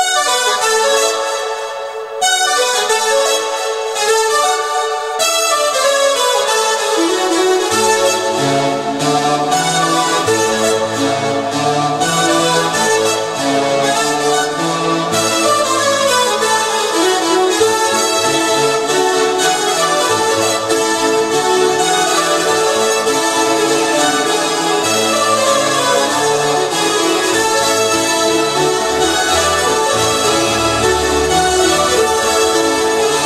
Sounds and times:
Music: 0.0s - 33.2s.

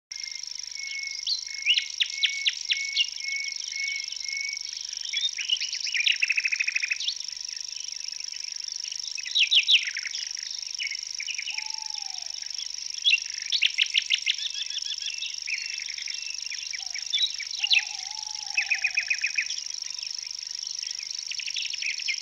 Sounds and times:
Chirp, tweet: 0.2s - 7.3s, 9.1s - 22.2s.

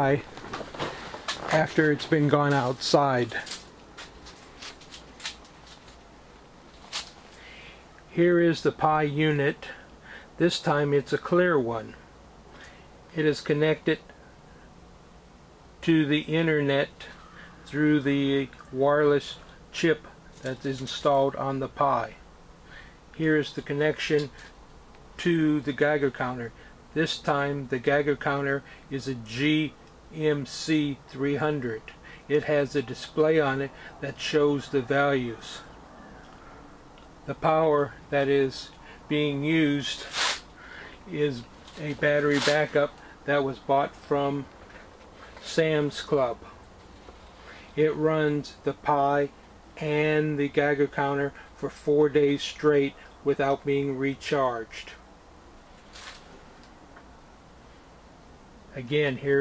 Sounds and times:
Speech: 0.0s - 0.3s, 1.4s - 3.6s, 8.1s - 9.8s, 10.4s - 12.0s, 13.1s - 14.1s, 15.8s - 22.2s, 23.1s - 24.5s, 25.2s - 35.7s, 37.2s - 40.3s, 41.0s - 44.5s, 45.4s - 46.6s, 47.8s - 55.0s, 58.7s - 59.4s.

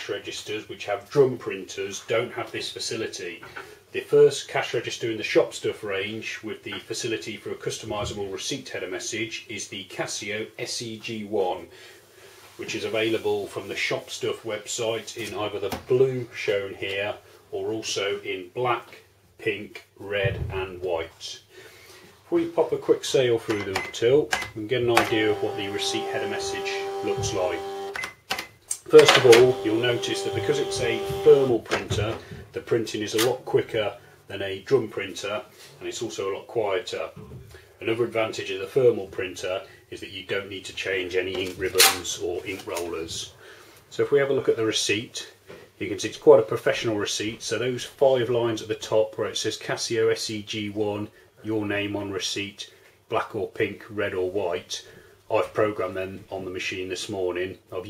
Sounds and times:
Speech: 0.0s - 11.8s, 12.6s - 21.5s, 22.3s - 27.7s, 28.8s - 57.9s.

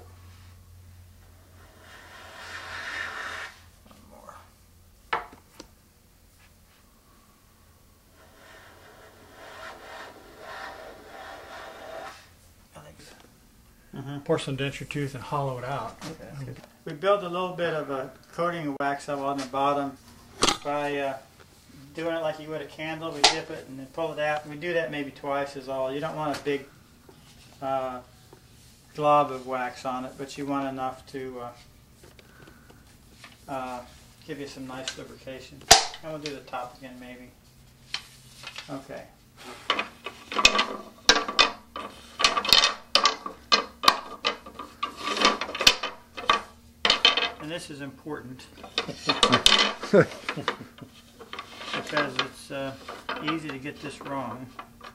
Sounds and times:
Wood: 39.5s - 47.5s.

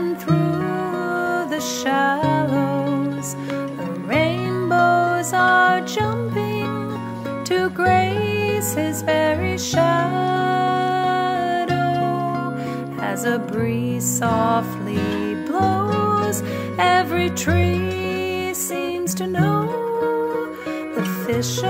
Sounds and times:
Lullaby: 0.0s - 21.7s.

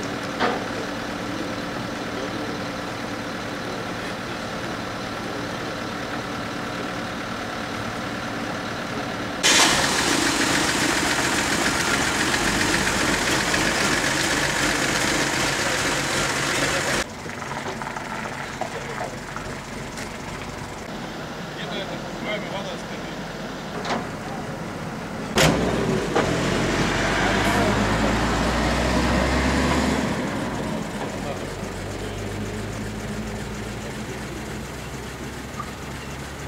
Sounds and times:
Car: 0.0s - 36.4s
Traffic noise, roadway noise: 0.0s - 36.4s
Truck: 0.0s - 36.4s.

